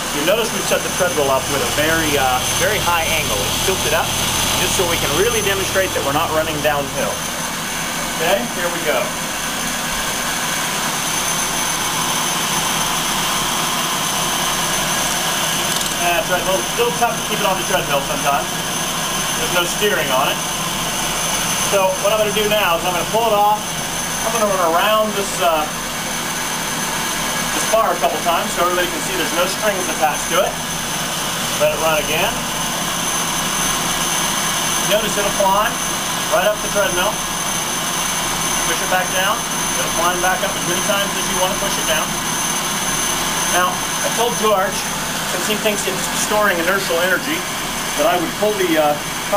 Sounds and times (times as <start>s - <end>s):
Speech: 0.1s - 7.2s, 8.1s - 9.2s, 16.0s - 18.5s, 19.4s - 20.4s, 21.7s - 25.8s, 27.5s - 30.6s, 31.6s - 32.4s, 34.8s - 37.2s, 38.6s - 42.1s, 43.5s - 49.3s.